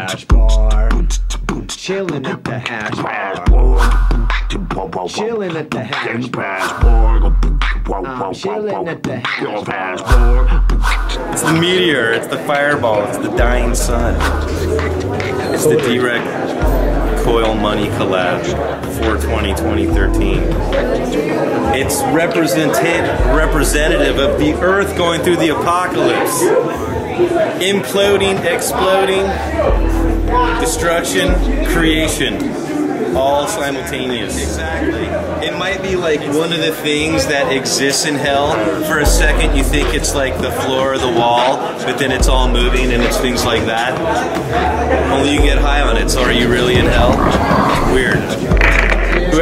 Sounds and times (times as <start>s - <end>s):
Speech: 0.0s - 4.0s, 4.6s - 10.6s, 11.2s - 49.4s.